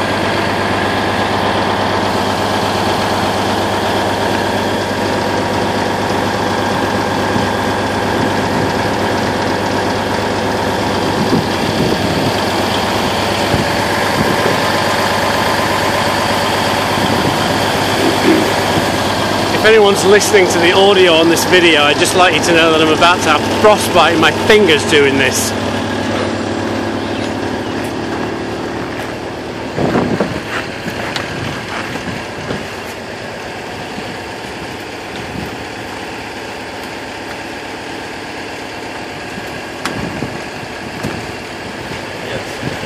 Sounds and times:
Outside, urban or manmade: 0.0s - 42.8s
Vehicle: 0.0s - 42.8s
Speech: 19.5s - 25.6s, 42.2s - 42.8s.

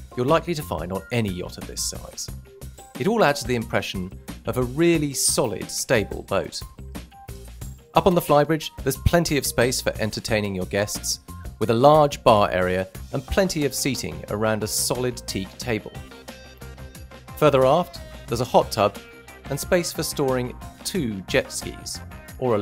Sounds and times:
Music: 0.0s - 22.6s
Speech: 0.2s - 2.3s, 3.0s - 6.7s, 8.0s - 16.0s, 17.4s - 22.6s.

